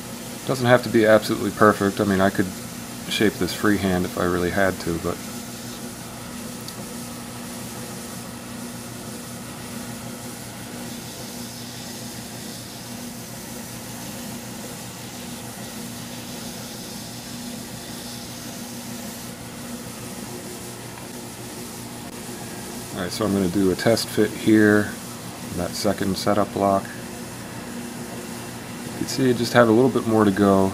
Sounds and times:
Speech: 0:00.4 - 0:05.2, 0:22.9 - 0:27.0, 0:29.0 - 0:30.7.

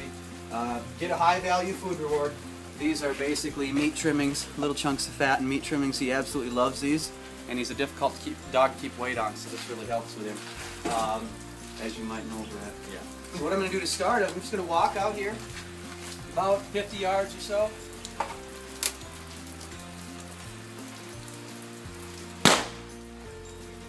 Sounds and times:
Speech: 0:00.0 - 0:15.4, 0:16.3 - 0:17.8
Music: 0:00.0 - 0:23.8.

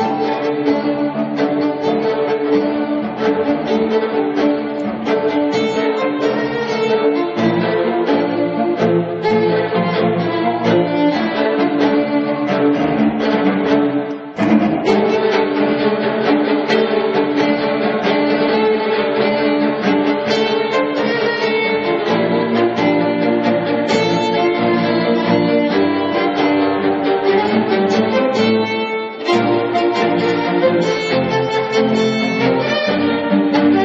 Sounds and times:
Orchestra: 0:00.0 - 0:33.8.

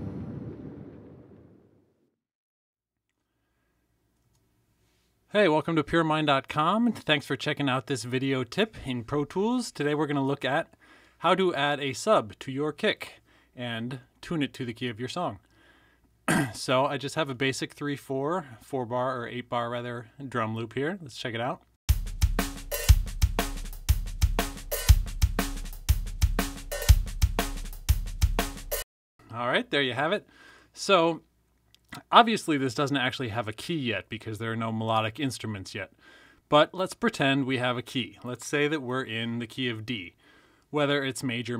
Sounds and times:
Speech: 0:05.3 - 0:15.4, 0:16.3 - 0:21.7, 0:29.3 - 0:31.3, 0:31.9 - 0:41.6
Music: 0:21.9 - 0:28.8.

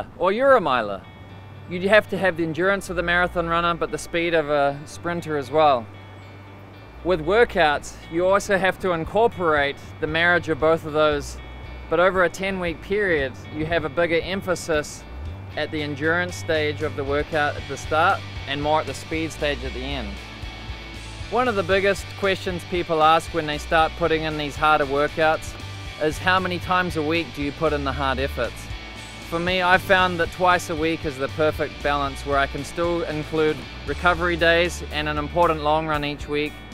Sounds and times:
Speech: 0:00.0 - 0:01.0, 0:01.7 - 0:05.8, 0:07.1 - 0:15.0, 0:15.6 - 0:20.2, 0:21.3 - 0:28.6, 0:29.3 - 0:36.6
Music: 0:00.0 - 0:36.7.

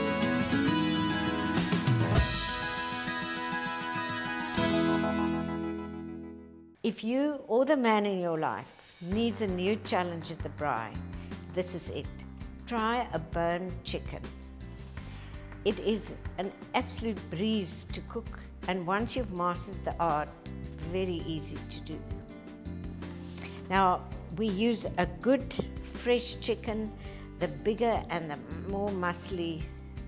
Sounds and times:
Music: 0:00.0 - 0:30.0
Speech: 0:06.9 - 0:14.3, 0:15.7 - 0:22.0, 0:23.7 - 0:29.7.

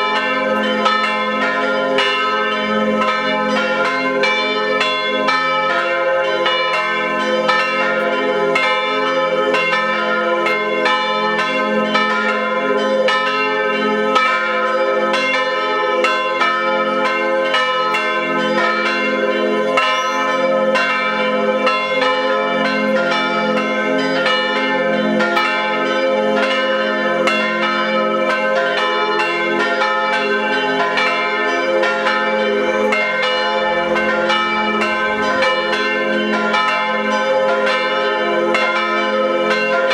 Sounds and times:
Church bell: 0:00.0 - 0:39.9.

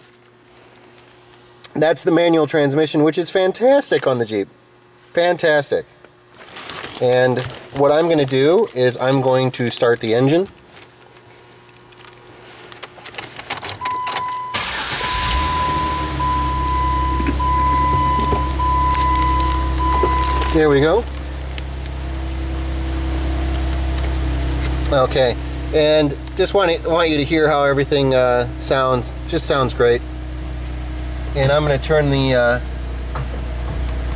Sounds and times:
Speech: 0:01.7 - 0:05.9, 0:07.0 - 0:10.6, 0:20.4 - 0:21.1, 0:24.9 - 0:30.0, 0:31.4 - 0:32.7
Vehicle: 0:14.6 - 0:34.1.

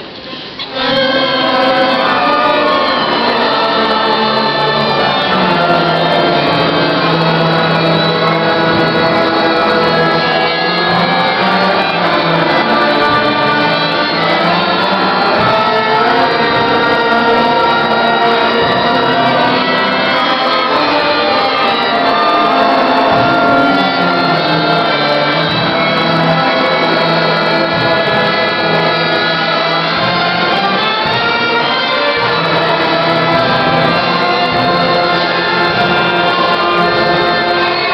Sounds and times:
Christmas music: 0:00.1 - 0:37.9.

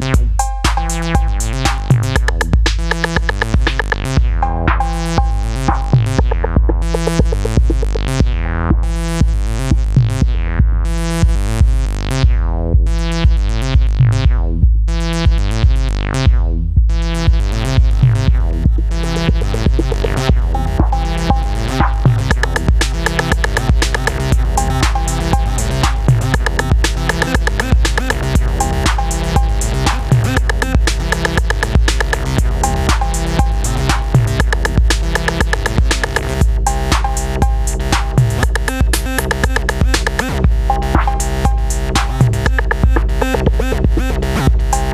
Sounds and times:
Electronic music: 0:00.0 - 0:16.3, 0:17.0 - 0:44.9.

